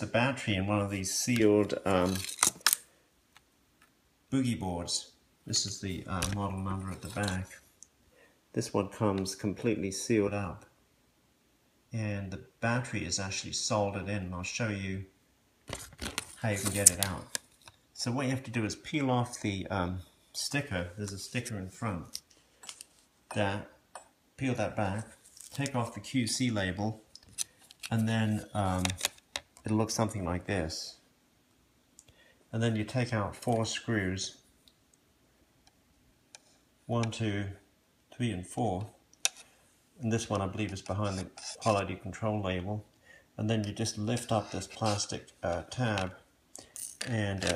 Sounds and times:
Speech: 0.0s - 2.3s, 4.3s - 7.6s, 8.5s - 10.8s, 11.9s - 15.2s, 16.4s - 17.4s, 18.0s - 22.2s, 23.3s - 23.8s, 24.4s - 27.0s, 27.9s - 31.1s, 32.5s - 34.4s, 36.9s - 39.0s, 40.0s - 46.3s, 47.0s - 47.5s.

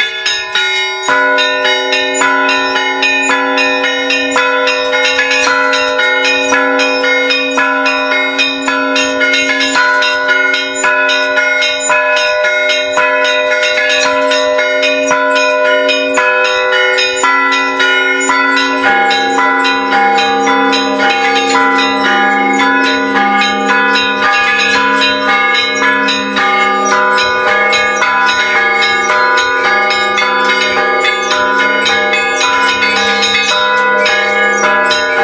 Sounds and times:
Change ringing (campanology): 0.0s - 35.2s.

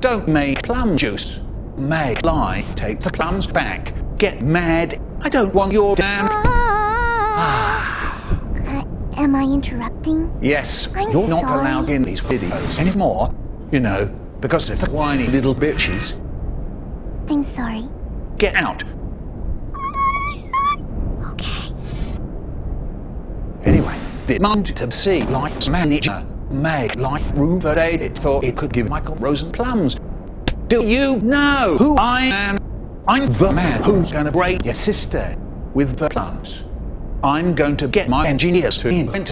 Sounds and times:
Speech: 0.0s - 6.4s, 8.6s - 16.2s, 17.3s - 18.9s, 23.7s - 30.0s, 30.7s - 36.6s, 37.2s - 39.3s.

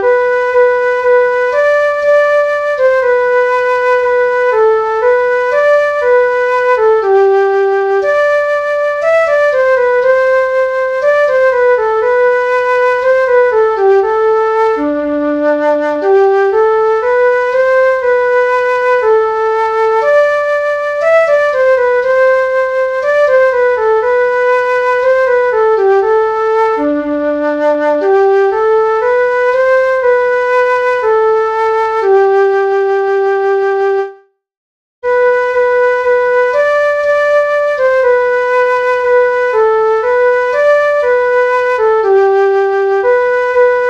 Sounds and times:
Clarinet: 0.0s - 34.4s, 35.0s - 43.9s
Flute: 0.0s - 34.4s, 35.0s - 43.9s.

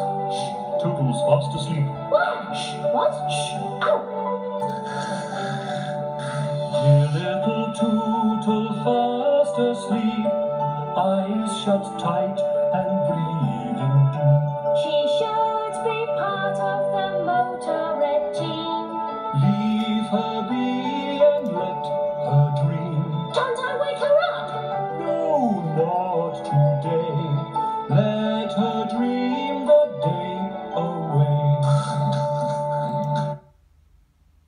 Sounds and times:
Tender music: 0.0s - 33.5s.

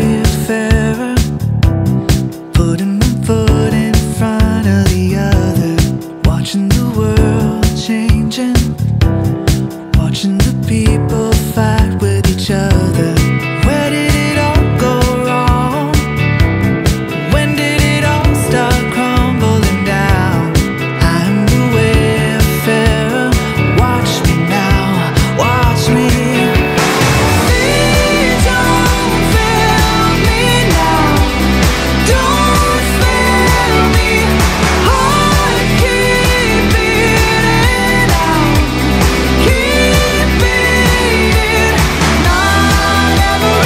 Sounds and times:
Independent music: 0.0s - 43.6s.

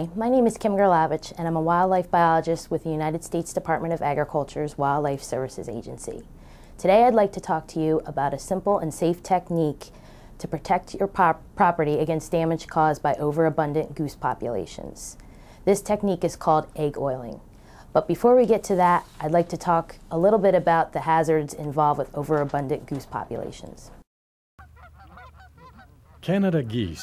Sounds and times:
Speech: 0.0s - 6.2s, 6.8s - 17.4s, 18.0s - 23.9s, 26.2s - 27.0s.

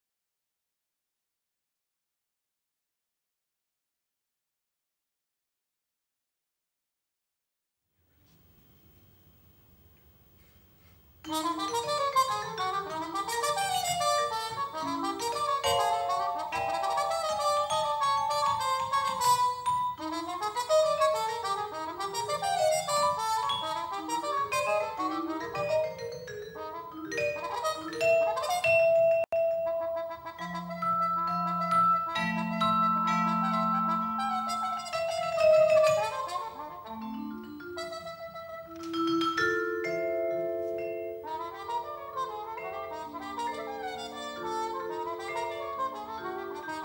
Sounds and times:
Percussion: 8.4s - 46.8s
Trumpet: 11.2s - 39.2s, 40.8s - 46.8s.

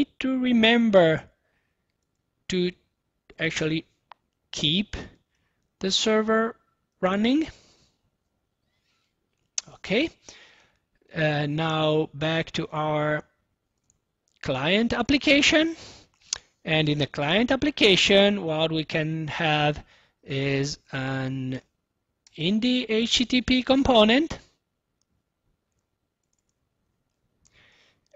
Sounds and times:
Speech: 0.0s - 1.4s, 2.5s - 5.2s, 5.8s - 7.6s, 9.6s - 10.2s, 11.1s - 13.4s, 14.4s - 15.8s, 16.6s - 21.7s, 22.3s - 24.6s.

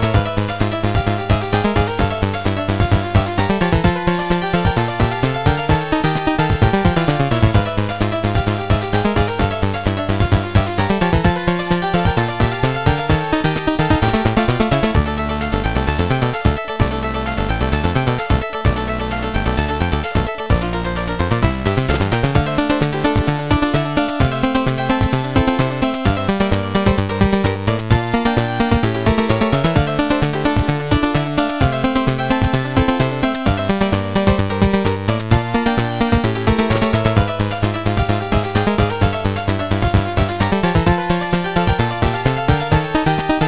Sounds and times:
Music: 0.0s - 43.4s.

